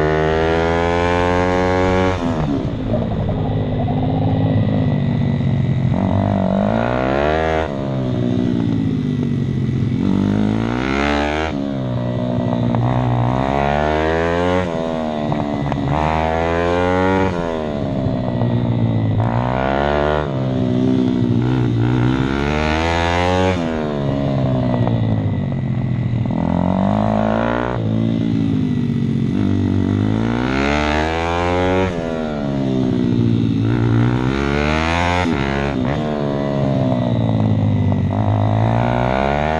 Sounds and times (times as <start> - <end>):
Accelerating, revving, vroom: 0.0 - 2.6, 6.0 - 7.8, 10.0 - 11.6, 12.8 - 15.0, 15.6 - 17.6, 19.2 - 23.8, 29.4 - 32.2, 33.6 - 36.4, 38.1 - 39.5
Medium engine (mid frequency): 0.0 - 39.5
Vehicle: 0.0 - 39.5.